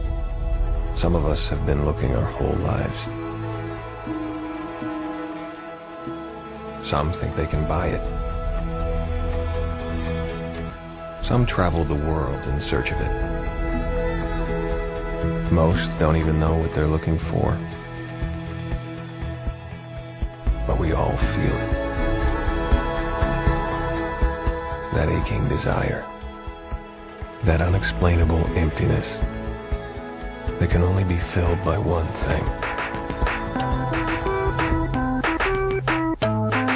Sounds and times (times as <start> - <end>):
Music: 0.0 - 36.7
Speech: 1.0 - 3.1, 6.8 - 8.1, 11.2 - 13.2, 15.2 - 17.7, 20.6 - 21.8, 24.9 - 26.1, 27.4 - 29.3, 30.6 - 32.6.